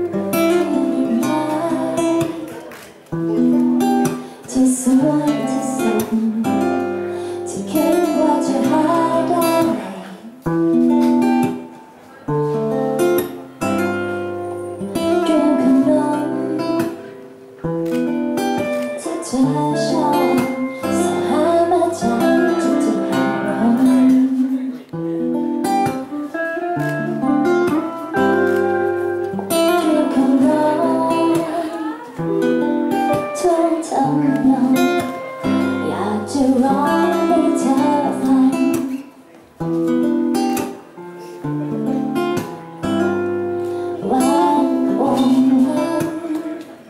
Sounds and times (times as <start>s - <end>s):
Music: 0.0s - 46.8s.